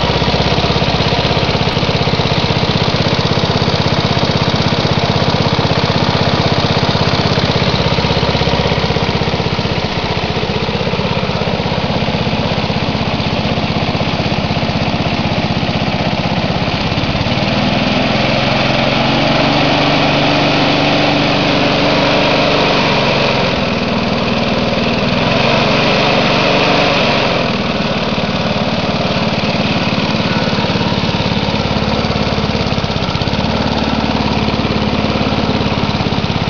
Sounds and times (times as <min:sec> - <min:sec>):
Lawn mower: 0:00.0 - 0:36.4
Vehicle: 0:00.0 - 0:36.4.